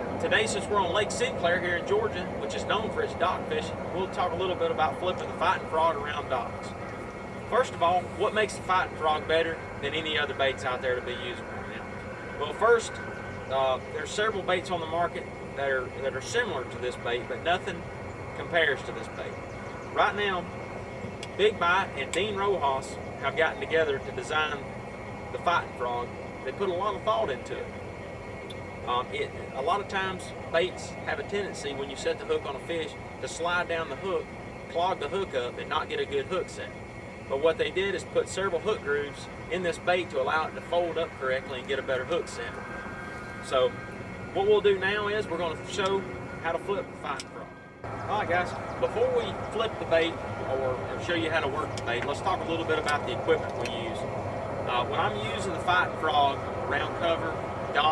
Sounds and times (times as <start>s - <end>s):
Speech: 0.2s - 6.8s, 7.5s - 11.8s, 12.4s - 17.8s, 18.4s - 20.5s, 21.4s - 24.7s, 25.4s - 27.7s, 28.9s - 42.6s, 43.5s - 43.7s, 44.4s - 47.5s, 48.1s - 54.1s, 54.7s - 57.9s.